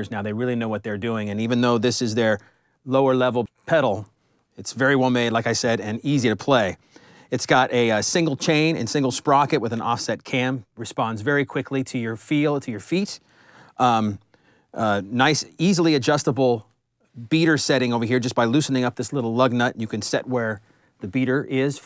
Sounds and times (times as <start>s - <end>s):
Speech: 0.0s - 13.2s, 13.8s - 14.2s, 14.8s - 21.8s.